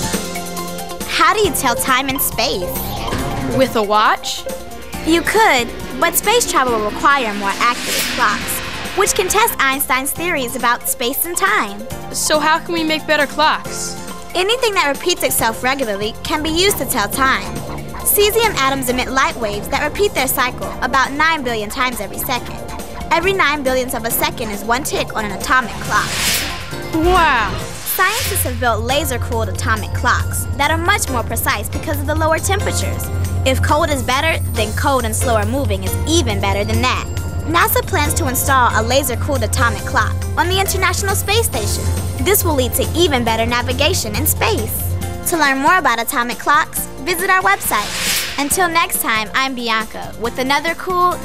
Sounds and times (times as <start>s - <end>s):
Music: 0.0s - 51.2s
Speech: 1.1s - 2.9s, 3.5s - 4.5s, 5.1s - 26.1s, 27.0s - 51.2s.